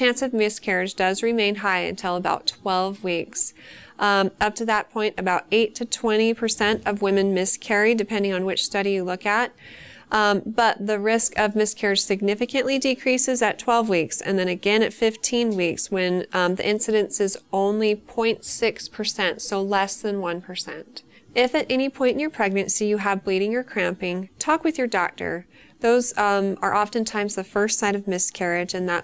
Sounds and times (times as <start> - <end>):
Speech: 0.0 - 9.5, 10.1 - 29.0.